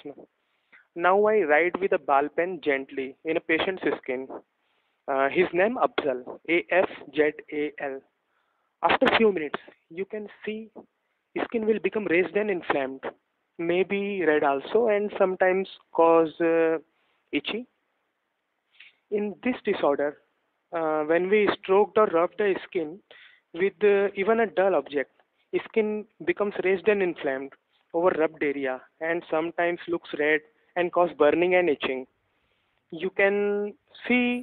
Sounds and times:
Speech: 0:00.0 - 0:00.3, 0:01.0 - 0:04.4, 0:05.1 - 0:08.1, 0:08.8 - 0:17.7, 0:19.1 - 0:32.1, 0:32.9 - 0:34.4.

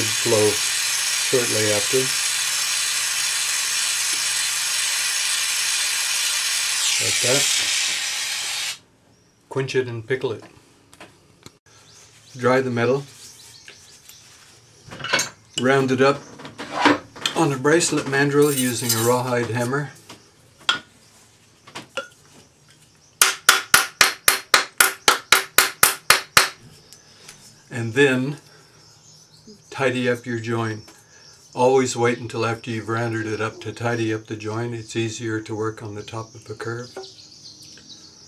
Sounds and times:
Hammer: 0:23.2 - 0:26.6.

